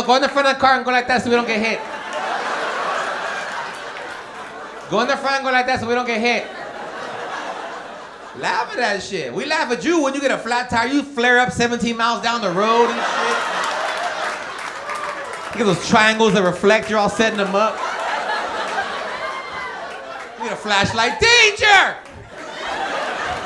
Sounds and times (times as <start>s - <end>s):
Speech: 0.0s - 1.8s, 4.9s - 6.5s, 8.4s - 13.4s, 15.6s - 17.8s, 20.4s - 22.0s.